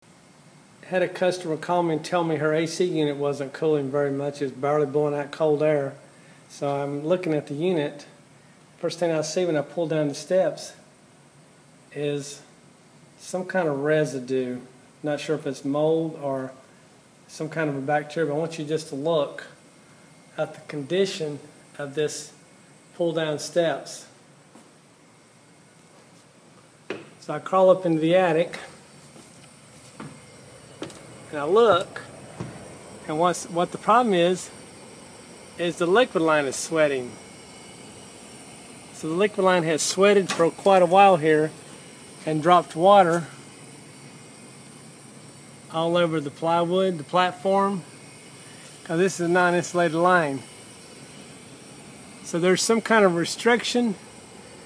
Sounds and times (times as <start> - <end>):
Speech: 0.8 - 8.2, 8.8 - 10.9, 11.9 - 12.5, 13.2 - 16.6, 17.3 - 19.6, 20.4 - 22.4, 23.0 - 24.2, 27.2 - 28.8, 31.3 - 32.1, 33.1 - 34.5, 35.6 - 37.2, 39.0 - 41.6, 42.2 - 43.4, 45.7 - 47.9, 48.8 - 50.4, 52.2 - 54.0.